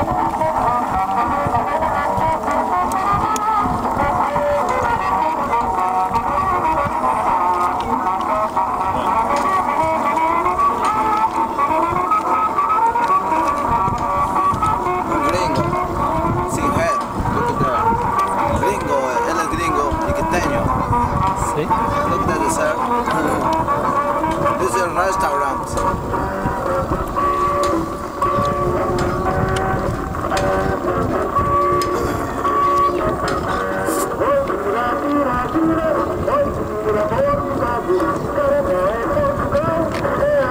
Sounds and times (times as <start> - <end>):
Boat, Water vehicle: 0.0 - 40.5
Music: 0.0 - 40.5
Speech: 15.2 - 15.8, 16.4 - 20.8, 21.4 - 23.5, 24.6 - 25.8.